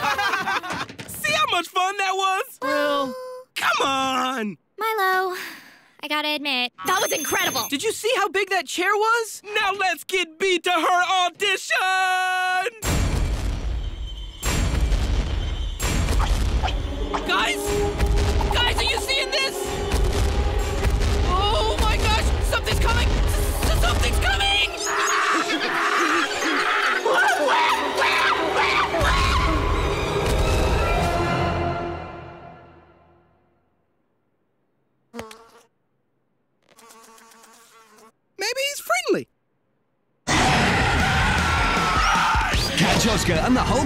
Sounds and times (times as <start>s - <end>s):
Music: 14.1s - 24.8s, 27.0s - 33.3s, 40.3s - 43.8s.